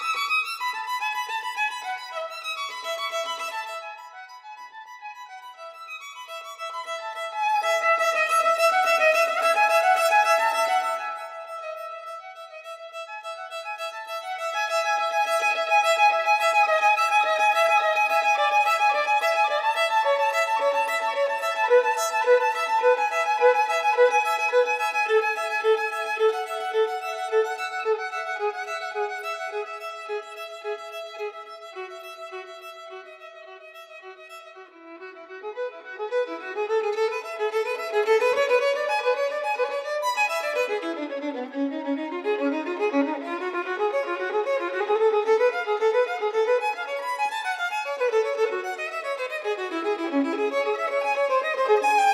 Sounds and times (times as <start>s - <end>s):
Violin, fiddle: 0.0s - 52.1s.